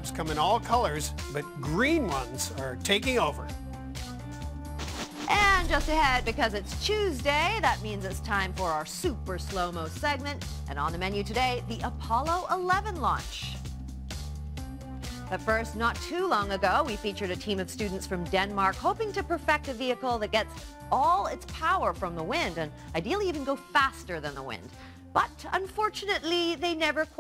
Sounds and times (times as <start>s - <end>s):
Music: 0.0s - 27.2s
Speech: 5.3s - 13.6s, 15.3s - 27.2s.